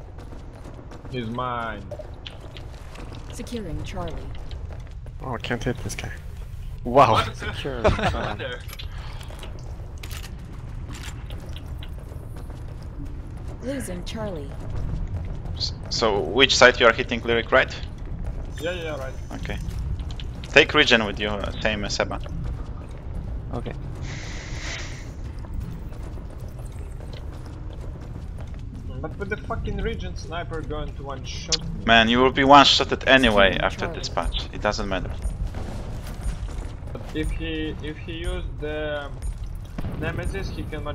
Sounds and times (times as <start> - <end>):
Speech: 3.4 - 4.3, 15.9 - 17.8, 28.9 - 35.1, 37.1 - 39.2, 40.0 - 40.9.